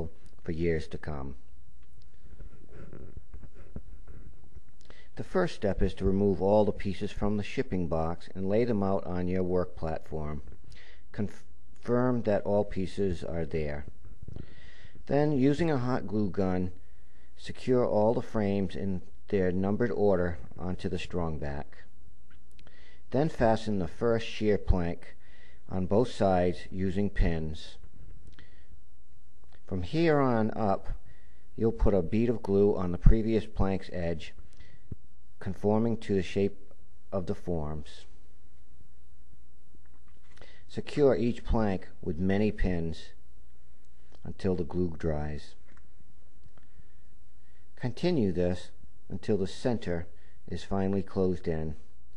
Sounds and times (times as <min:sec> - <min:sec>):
Speech: 0:00.0 - 0:01.5, 0:05.1 - 0:14.0, 0:15.0 - 0:16.8, 0:17.4 - 0:21.9, 0:23.1 - 0:27.9, 0:29.7 - 0:34.5, 0:35.4 - 0:38.2, 0:40.7 - 0:43.2, 0:44.2 - 0:45.7, 0:47.8 - 0:51.9.